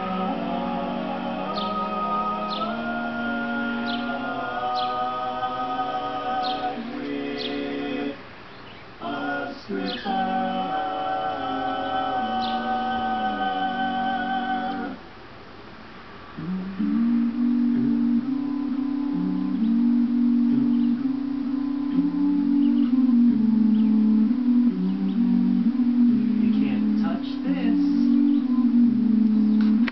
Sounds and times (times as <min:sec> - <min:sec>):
Music: 0:00.0 - 0:08.2, 0:09.1 - 0:15.0, 0:16.4 - 0:29.9.